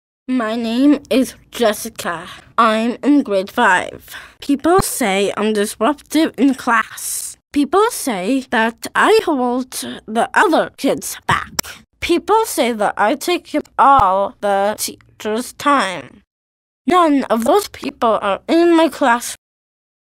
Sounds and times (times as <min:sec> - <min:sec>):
Speech: 0:00.3 - 0:16.3, 0:16.9 - 0:19.4.